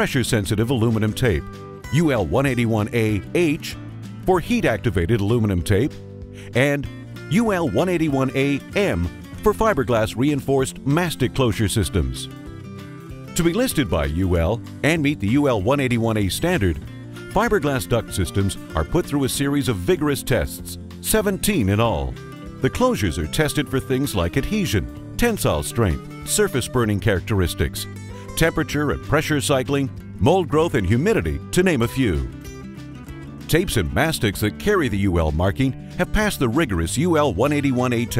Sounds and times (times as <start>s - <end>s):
Speech: 0.0s - 12.3s, 13.4s - 32.3s, 33.5s - 38.1s
Music: 0.0s - 38.1s.